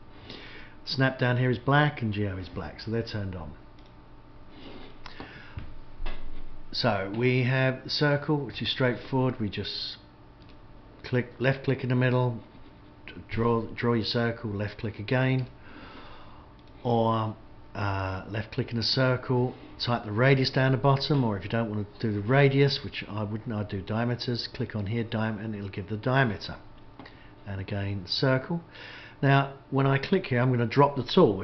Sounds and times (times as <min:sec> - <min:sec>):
Speech: 0:00.9 - 0:03.6, 0:06.8 - 0:10.1, 0:11.0 - 0:12.5, 0:13.1 - 0:15.5, 0:16.8 - 0:26.7, 0:27.4 - 0:31.4.